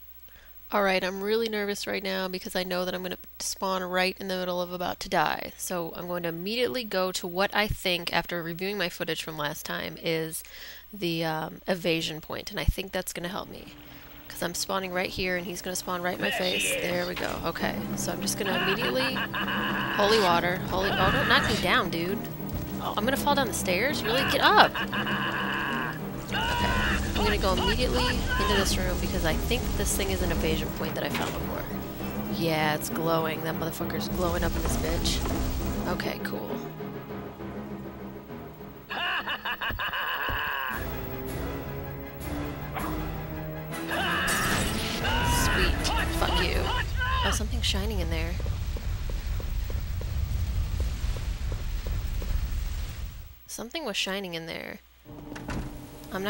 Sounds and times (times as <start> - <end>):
Speech: 0.7 - 10.4, 11.0 - 13.7, 14.3 - 19.2, 20.0 - 24.7, 26.4 - 35.2, 35.9 - 36.6, 43.9 - 48.4, 53.5 - 54.8
Music: 13.4 - 39.4, 40.4 - 47.2, 55.1 - 56.3.